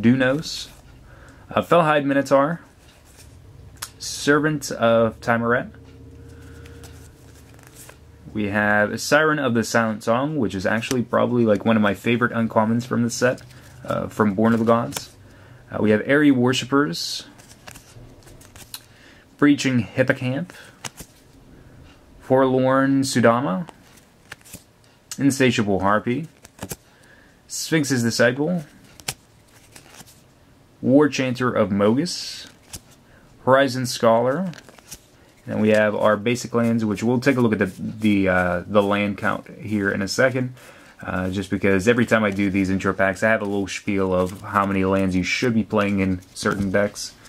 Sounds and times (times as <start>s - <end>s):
Speech: 0.0s - 0.8s, 1.5s - 2.7s, 3.9s - 5.8s, 8.3s - 17.3s, 19.4s - 20.6s, 22.2s - 23.8s, 25.2s - 26.3s, 27.5s - 28.7s, 30.8s - 32.6s, 33.4s - 34.6s, 35.5s - 47.2s.